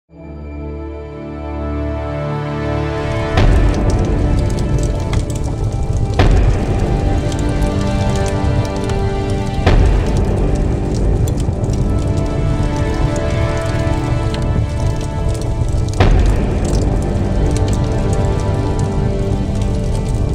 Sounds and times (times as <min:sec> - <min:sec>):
Music: 0:00.1 - 0:20.3
Fire: 0:02.8 - 0:20.3.